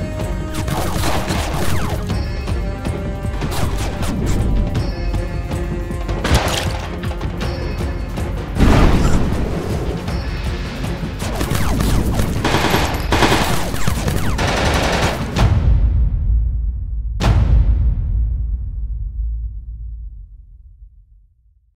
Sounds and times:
Music: 0.0s - 21.6s
Sound effect: 0.5s - 2.3s, 3.4s - 4.8s, 8.6s - 10.3s, 11.2s - 20.3s.

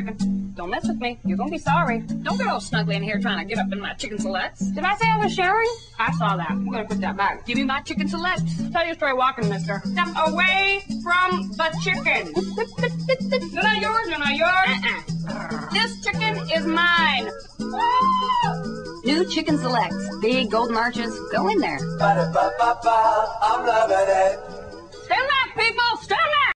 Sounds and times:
Speech: 0.0s - 12.5s, 13.5s - 17.3s, 19.1s - 21.9s, 25.1s - 26.5s
Music: 0.0s - 26.5s.

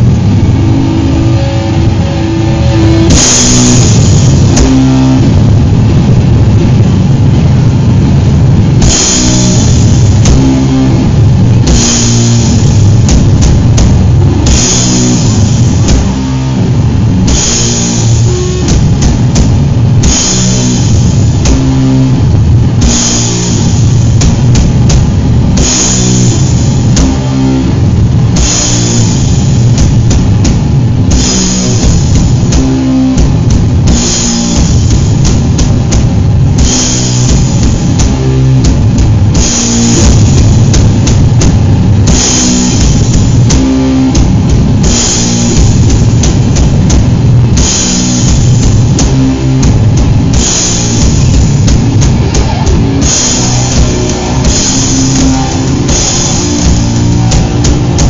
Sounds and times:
Drum: 0.0s - 58.1s
Drum kit: 0.0s - 58.1s
Heavy metal: 0.0s - 58.1s.

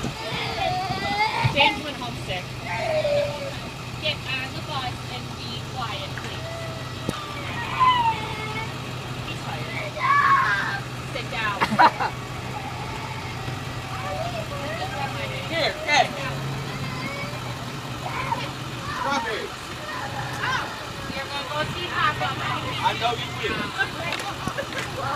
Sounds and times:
Bus: 0.0s - 25.1s.

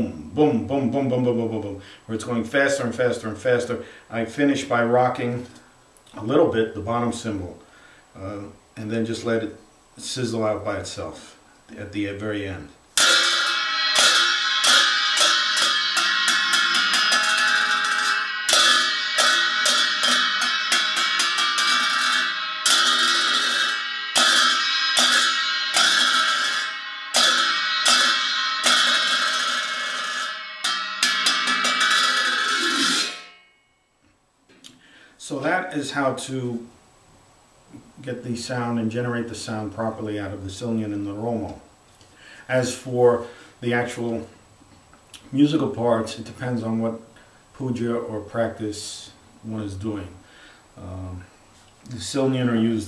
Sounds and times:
Speech: 0.0s - 7.6s, 8.2s - 12.8s, 35.2s - 36.8s, 38.0s - 41.7s, 42.5s - 44.4s, 45.2s - 50.2s, 50.8s - 51.3s, 51.9s - 52.8s
Inside, small room: 0.0s - 52.8s.

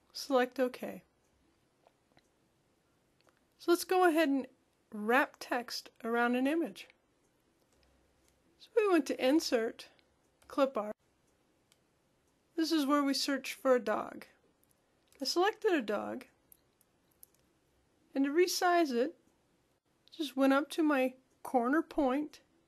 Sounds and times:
Speech: 0.2s - 1.0s, 3.6s - 6.9s, 8.6s - 9.9s, 10.5s - 11.0s, 12.6s - 14.4s, 15.2s - 16.2s, 18.1s - 19.2s, 20.1s - 22.4s
Clicking: 3.2s - 3.5s, 7.2s - 8.4s, 11.2s - 12.4s, 16.5s - 17.5s.

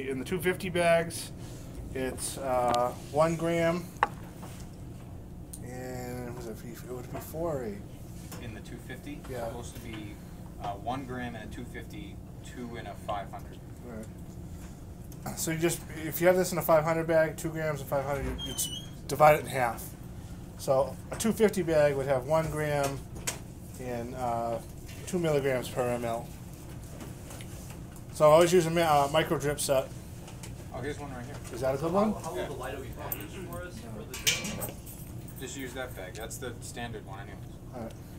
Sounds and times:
Speech: 0.0s - 1.3s, 5.6s - 7.8s, 8.4s - 14.1s, 15.3s - 19.9s, 20.6s - 23.0s, 23.8s - 26.3s.

